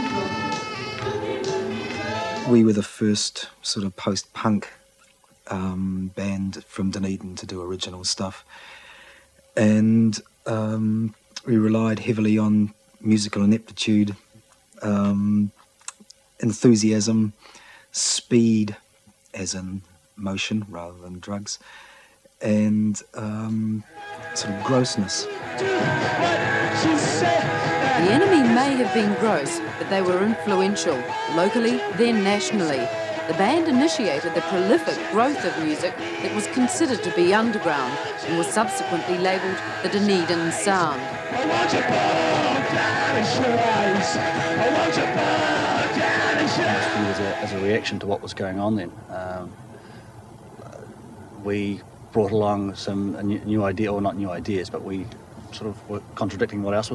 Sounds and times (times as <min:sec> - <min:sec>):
Speech: 0:02.5 - 0:04.8, 0:05.5 - 0:08.5, 0:09.6 - 0:14.2, 0:14.8 - 0:17.4, 0:18.0 - 0:18.8, 0:19.4 - 0:21.6, 0:22.4 - 0:25.3, 0:28.0 - 0:41.0, 0:46.5 - 0:49.6, 0:50.6 - 0:56.9.